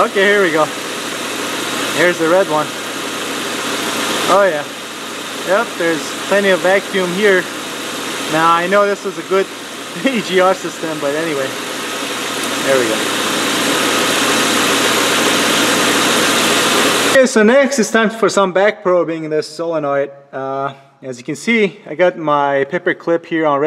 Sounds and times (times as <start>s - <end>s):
Speech: 0.0s - 0.7s, 2.0s - 2.7s, 4.3s - 4.7s, 5.4s - 7.5s, 8.3s - 11.6s, 12.6s - 13.1s, 17.2s - 23.6s
Engine: 0.0s - 17.2s.